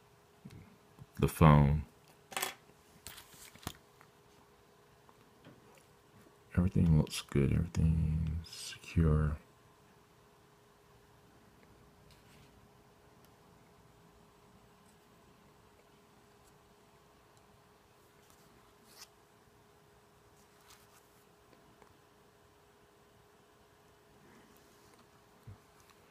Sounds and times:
Inside, small room: 0.0 - 26.1.

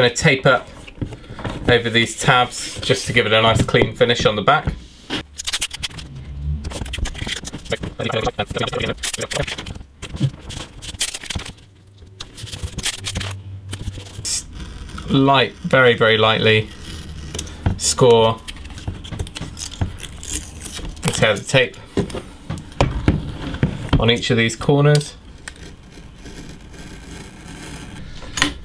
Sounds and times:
Speech: 0.0 - 0.7, 1.7 - 4.7, 7.8 - 9.5, 15.1 - 16.7, 17.8 - 18.4, 21.1 - 21.8, 24.0 - 25.2.

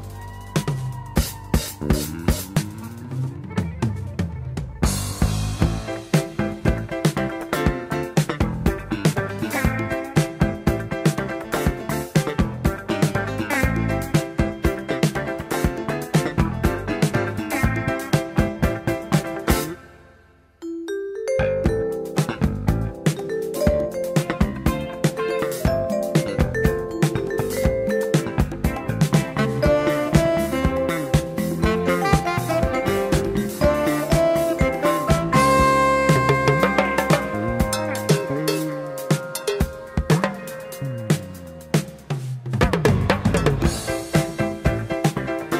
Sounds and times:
Soul music: 0.0 - 45.5
Swing music: 0.0 - 45.5
Marimba, xylophone: 20.6 - 42.0
Vibraphone: 20.6 - 42.1.

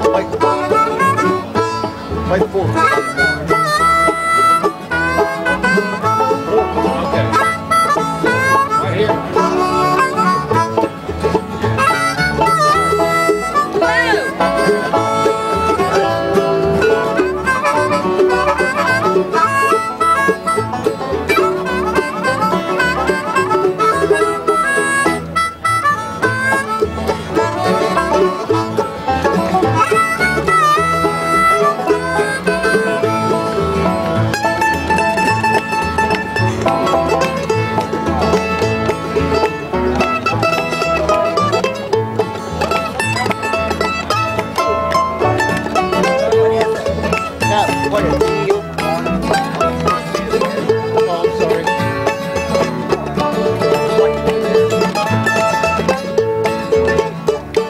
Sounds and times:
Music: 0.0 - 57.7
Speech: 2.2 - 3.8, 8.8 - 9.2, 13.8 - 14.4, 46.0 - 51.8.

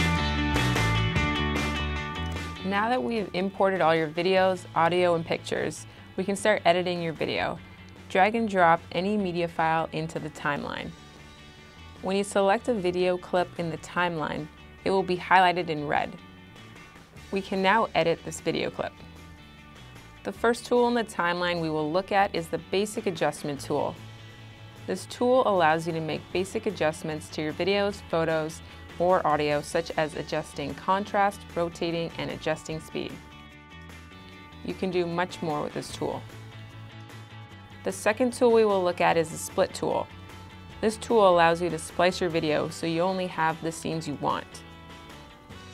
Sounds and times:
Music: 0.0 - 45.7
Speech: 2.6 - 11.0, 12.0 - 16.2, 17.3 - 19.0, 20.3 - 24.0, 24.9 - 33.2, 34.6 - 36.3, 37.9 - 40.1, 40.8 - 44.6.

